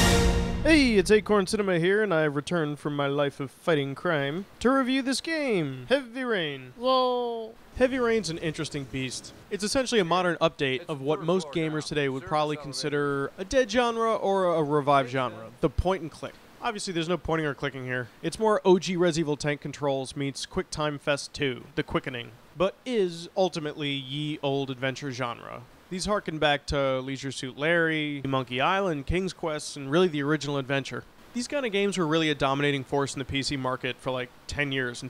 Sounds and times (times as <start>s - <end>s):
Speech: 0.6s - 35.0s.